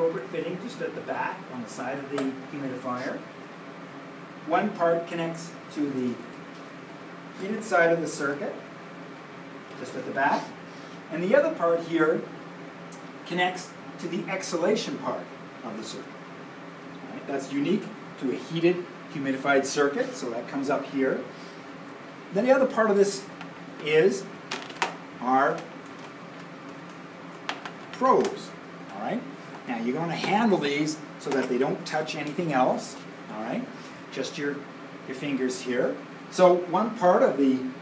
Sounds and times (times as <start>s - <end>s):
Speech: 0.0s - 3.3s, 4.5s - 6.3s, 7.4s - 8.6s, 9.8s - 12.3s, 13.2s - 16.1s, 17.1s - 21.3s, 22.3s - 24.3s, 25.2s - 25.7s, 28.0s - 37.8s.